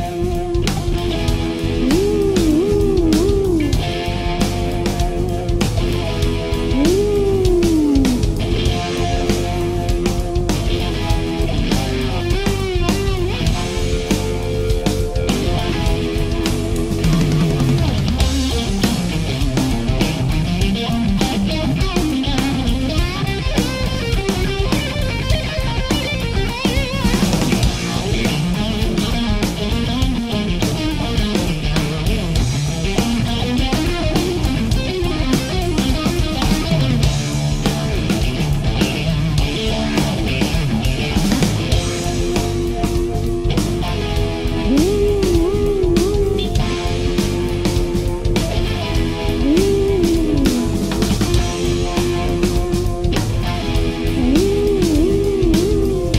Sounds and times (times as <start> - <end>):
Heavy metal: 0.0 - 56.1.